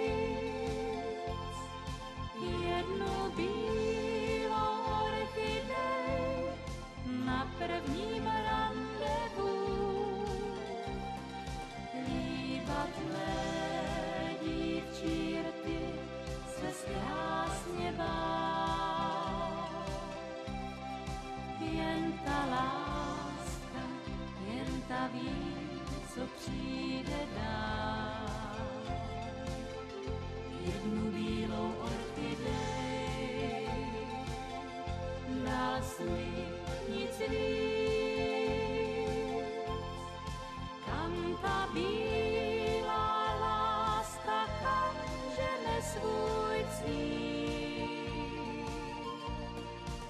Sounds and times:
Music: 0.0s - 50.0s.

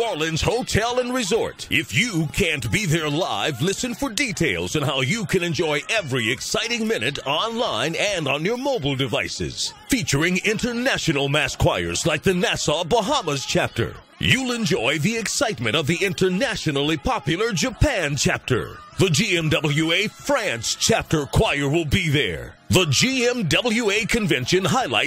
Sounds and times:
Gospel music: 0.0s - 25.0s
Speech: 0.0s - 25.0s.

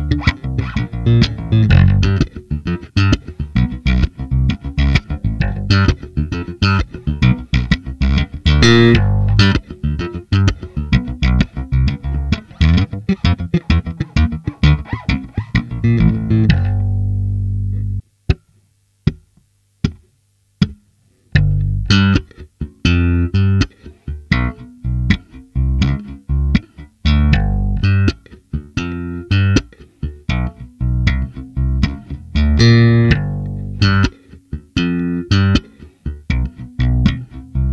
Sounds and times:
Bass guitar: 0.0s - 20.0s, 20.6s - 37.7s.

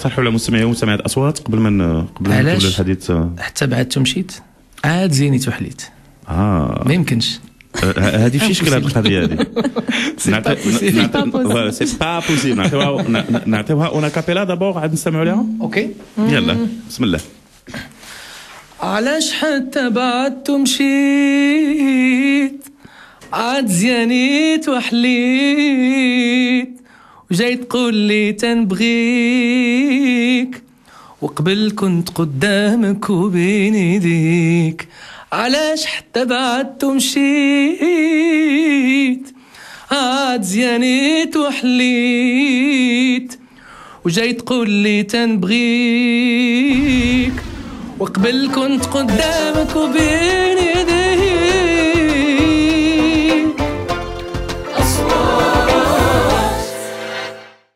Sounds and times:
Speech: 0.0s - 9.4s, 10.2s - 17.4s.

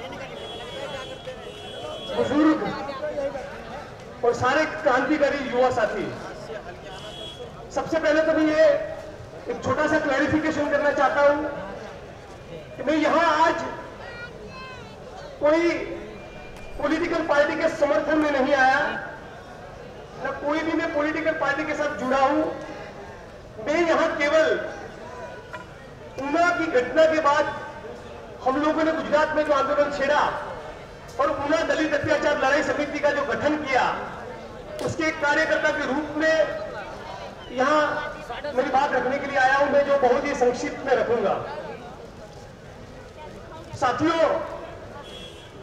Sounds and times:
Male speech, man speaking: 0.0s - 13.9s, 15.1s - 19.2s, 20.2s - 23.0s, 23.6s - 25.4s, 26.1s - 30.6s, 31.2s - 42.0s, 43.2s - 44.8s.

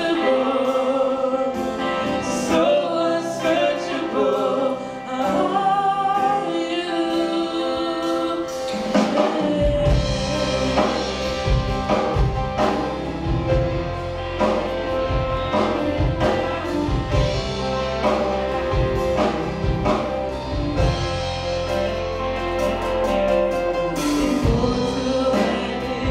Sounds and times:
Male singing: 0.0s - 11.6s, 23.8s - 26.1s
Music: 0.0s - 26.1s
Female singing: 2.5s - 11.1s, 24.0s - 26.1s.

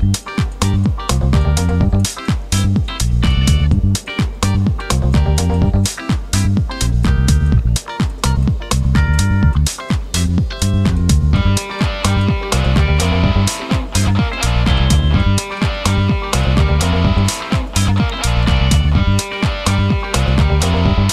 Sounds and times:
Music: 0.0s - 21.1s.

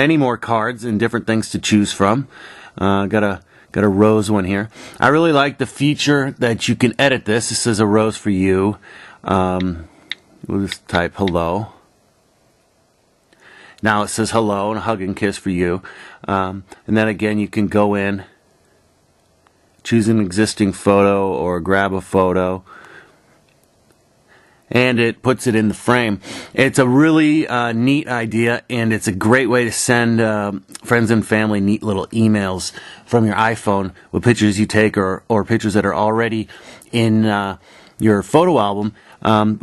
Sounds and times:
Speech: 0.0s - 11.8s, 13.8s - 18.4s, 19.8s - 22.7s, 24.7s - 39.6s
Inside, small room: 0.0s - 39.6s.

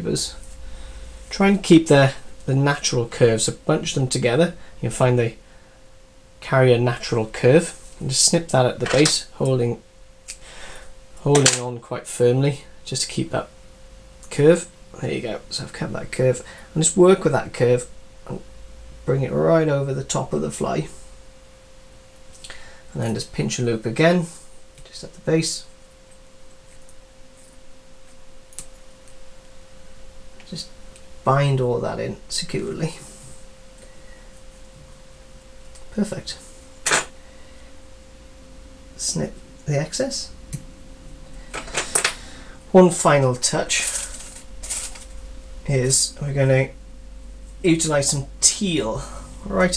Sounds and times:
Speech: 0.0s - 0.4s, 1.3s - 5.4s, 6.4s - 9.8s, 11.2s - 13.5s, 14.3s - 18.5s, 19.1s - 21.0s, 22.9s - 25.7s, 30.4s - 33.1s, 35.9s - 36.5s, 39.0s - 40.3s, 42.7s - 44.1s, 45.6s - 46.8s, 47.6s - 49.7s.

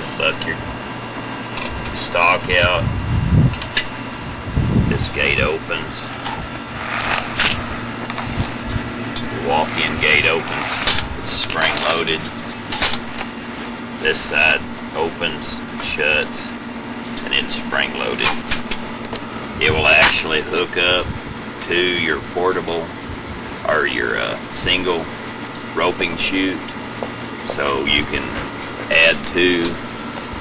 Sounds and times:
Speech: 0.0s - 0.6s, 2.0s - 2.9s, 4.9s - 6.1s, 9.3s - 10.6s, 11.2s - 12.3s, 14.0s - 16.6s, 17.2s - 18.4s, 19.6s - 22.9s, 23.6s - 25.1s, 25.8s - 26.8s, 27.5s - 29.8s
Outside, urban or manmade: 0.0s - 26.0s.

